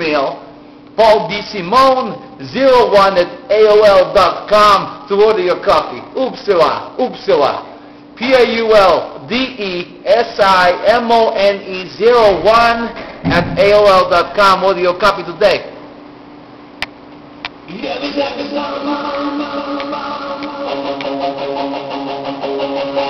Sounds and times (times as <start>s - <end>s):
Speech: 0.0s - 0.4s, 1.0s - 15.8s
Music: 17.7s - 23.1s.